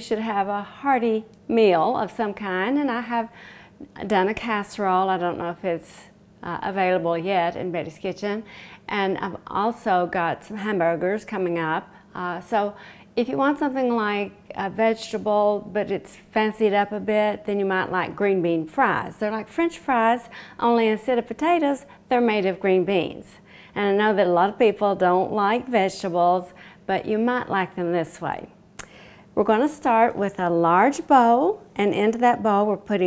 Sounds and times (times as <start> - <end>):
Speech: 0.0 - 28.5, 29.4 - 33.0.